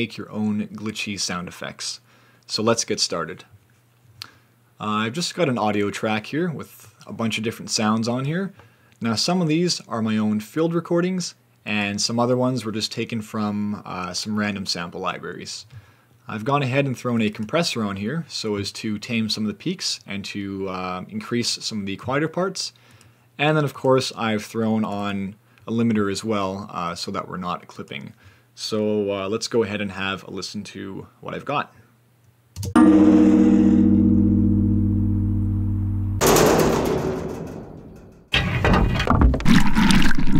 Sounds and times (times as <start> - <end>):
Speech: 0.0 - 3.6, 4.8 - 22.8, 23.4 - 31.9.